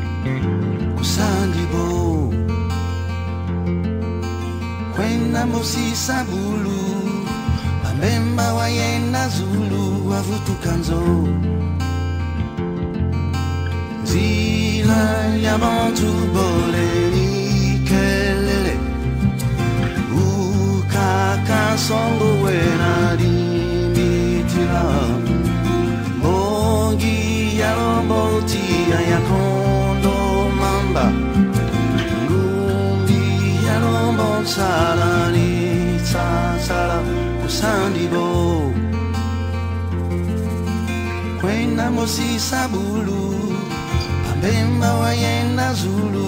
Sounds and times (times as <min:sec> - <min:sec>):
Christmas music: 0:00.0 - 0:46.2.